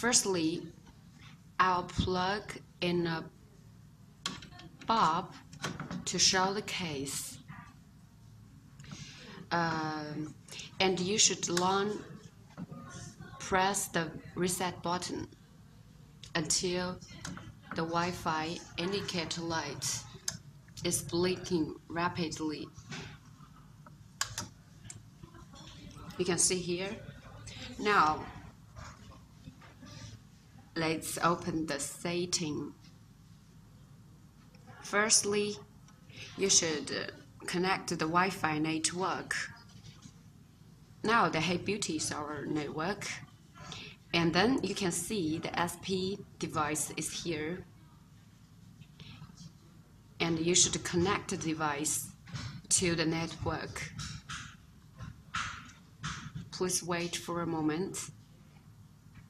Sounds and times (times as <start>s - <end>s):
Female speech, woman speaking: 0.0s - 0.8s, 1.6s - 3.4s, 4.3s - 7.8s, 9.4s - 15.4s, 16.3s - 23.0s, 25.2s - 32.9s, 34.6s - 40.0s, 41.0s - 48.0s, 50.2s - 54.0s, 56.6s - 58.2s.